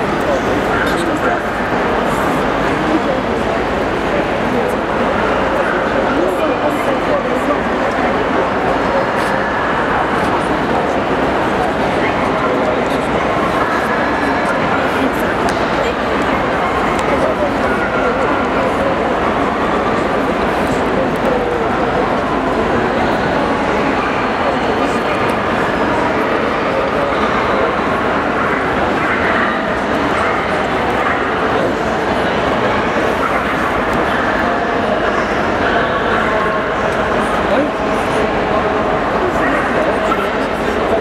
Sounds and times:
Speech: 0:00.0 - 0:41.0.

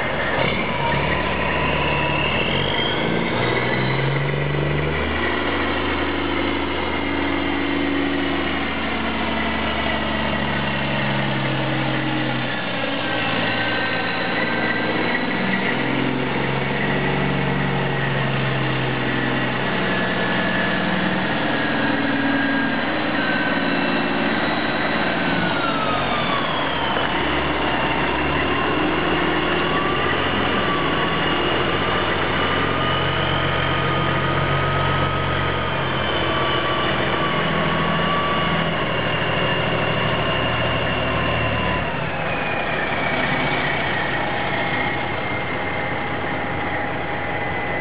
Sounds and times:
Truck: 0:00.0 - 0:47.8.

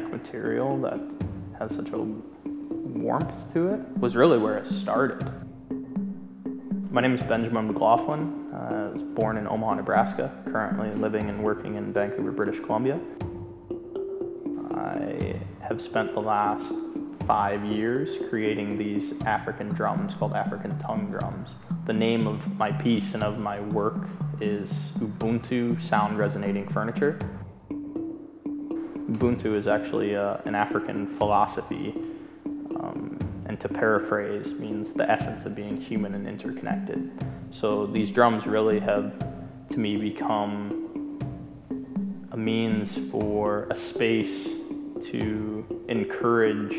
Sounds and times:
Speech: 0:00.0 - 0:02.2, 0:02.9 - 0:05.3, 0:06.9 - 0:13.1, 0:14.6 - 0:27.2, 0:29.1 - 0:32.0, 0:32.8 - 0:39.1, 0:39.7 - 0:40.8, 0:42.3 - 0:46.7
Music: 0:00.0 - 0:46.7.

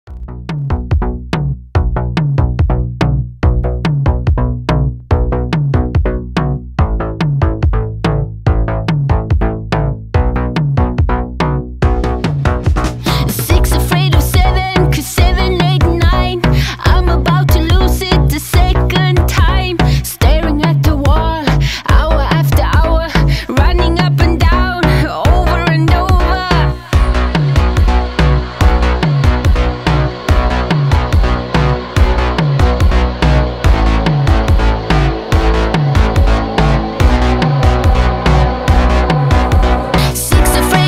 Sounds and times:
Drum machine: 0:00.1 - 0:40.8.

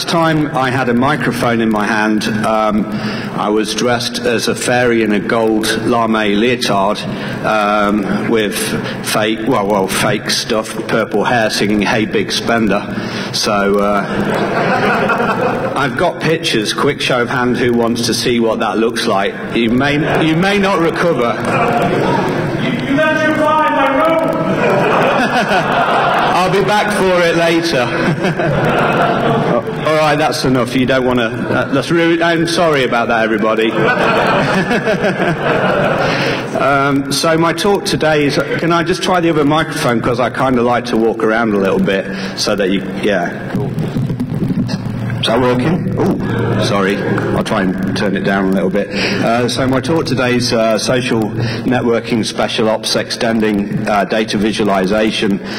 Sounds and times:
Speech: 0:00.0 - 0:14.1, 0:15.8 - 0:24.5, 0:26.3 - 0:28.0, 0:29.5 - 0:33.8, 0:36.6 - 0:43.5, 0:44.7 - 0:55.4.

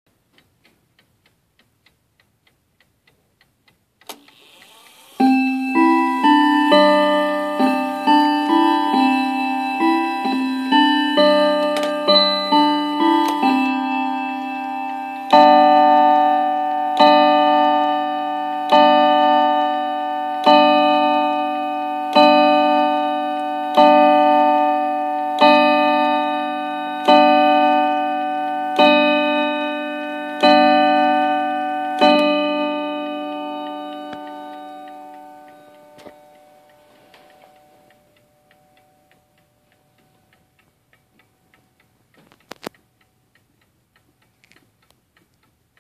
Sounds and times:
Tick-tock: 0:00.3 - 0:45.8.

